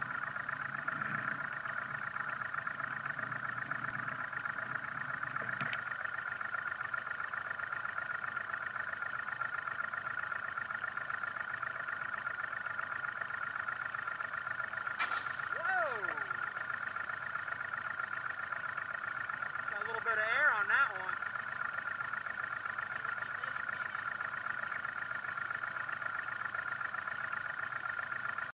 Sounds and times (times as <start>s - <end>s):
Vehicle: 0.0s - 28.5s
Speech: 15.5s - 16.4s, 19.7s - 21.2s, 23.0s - 24.1s.